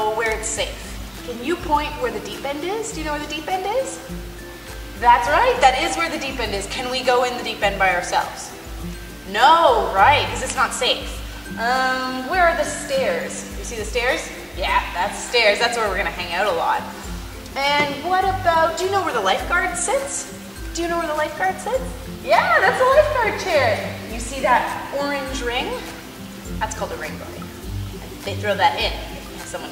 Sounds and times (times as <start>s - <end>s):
Speech: 0.0s - 4.1s, 5.0s - 8.5s, 9.3s - 16.9s, 17.6s - 26.0s, 26.6s - 27.4s, 28.1s - 29.7s
Music: 0.0s - 29.7s.